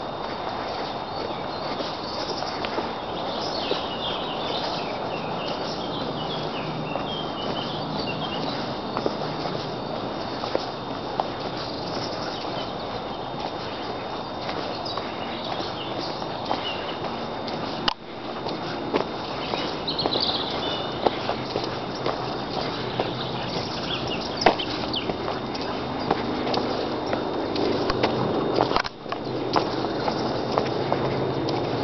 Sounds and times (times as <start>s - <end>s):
Walk, footsteps: 0.0s - 31.8s.